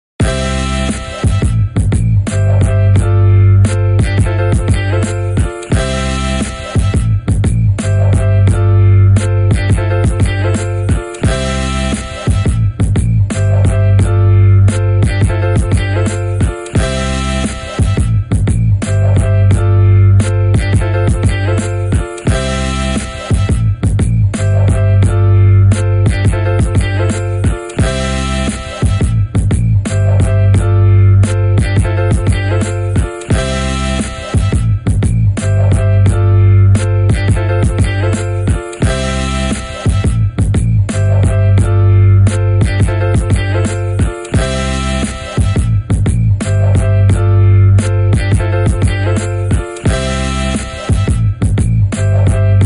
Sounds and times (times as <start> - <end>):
Music: 0.2 - 52.6.